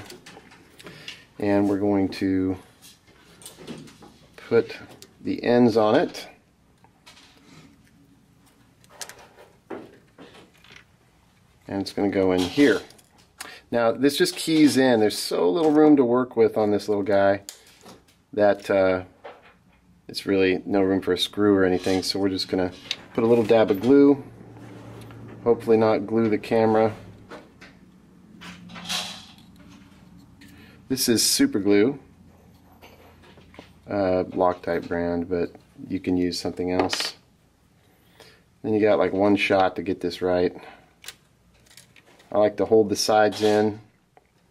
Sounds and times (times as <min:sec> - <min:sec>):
Speech: 0:01.4 - 0:02.7, 0:04.4 - 0:06.4, 0:11.7 - 0:12.9, 0:13.7 - 0:17.5, 0:18.4 - 0:19.1, 0:20.1 - 0:24.2, 0:25.4 - 0:27.0, 0:30.9 - 0:32.1, 0:33.9 - 0:37.2, 0:38.6 - 0:40.8, 0:42.3 - 0:43.9.